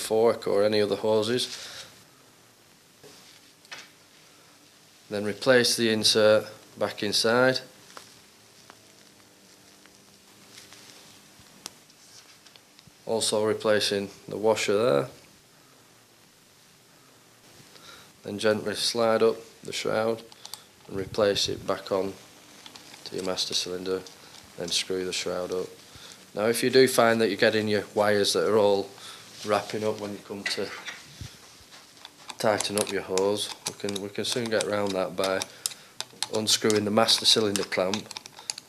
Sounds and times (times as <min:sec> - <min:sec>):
Speech: 0:00.0 - 0:01.6, 0:05.1 - 0:07.7, 0:13.0 - 0:15.2, 0:18.2 - 0:20.3, 0:20.9 - 0:22.2, 0:23.0 - 0:25.8, 0:26.4 - 0:30.9, 0:32.4 - 0:35.5, 0:36.3 - 0:38.1
Inside, small room: 0:00.0 - 0:38.6.